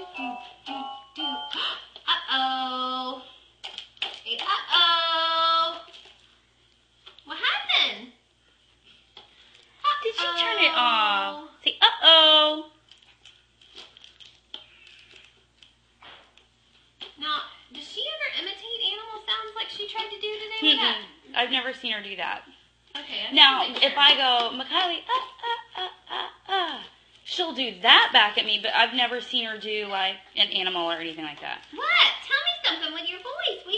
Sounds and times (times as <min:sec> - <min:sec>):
Conversation: 0:00.0 - 0:33.7
Female speech, woman speaking: 0:02.1 - 0:03.3, 0:04.2 - 0:05.9, 0:07.3 - 0:08.2, 0:09.9 - 0:12.8, 0:17.2 - 0:25.2, 0:26.5 - 0:33.7.